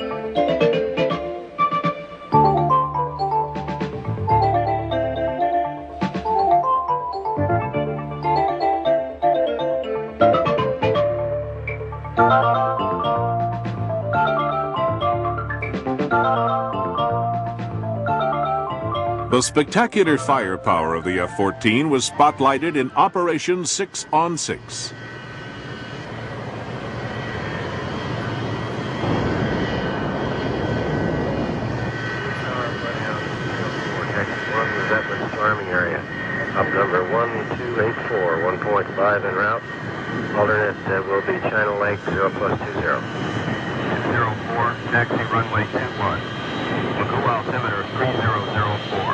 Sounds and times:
Aircraft: 0.0s - 49.1s.

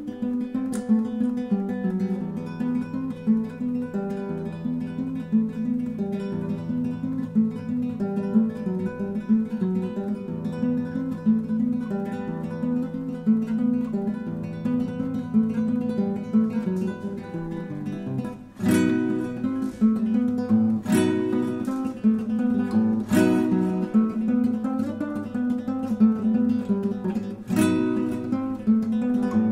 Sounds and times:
Guitar: 0.0s - 29.5s.

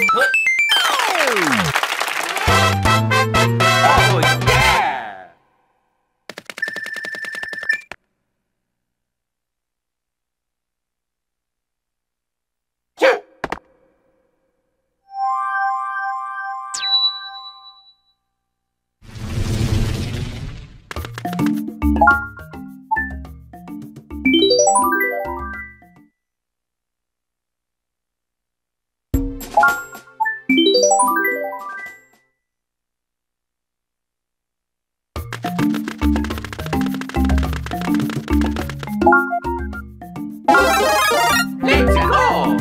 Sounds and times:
Music: 2.4s - 4.8s, 21.0s - 26.1s, 29.2s - 32.2s, 35.2s - 42.6s.

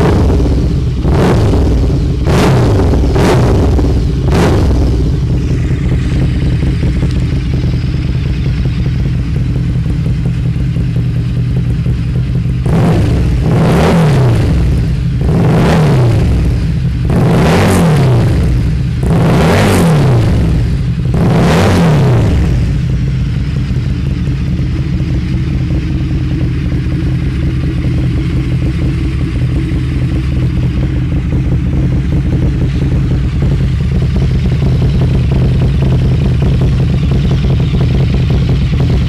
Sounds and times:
Clatter: 0.0s - 39.0s.

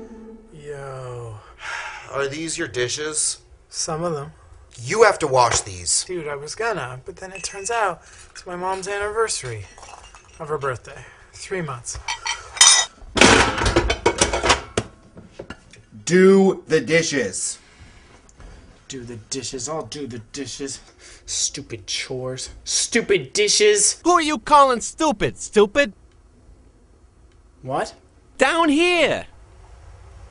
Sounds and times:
Dishes, pots, and pans: 12.1s - 15.7s.

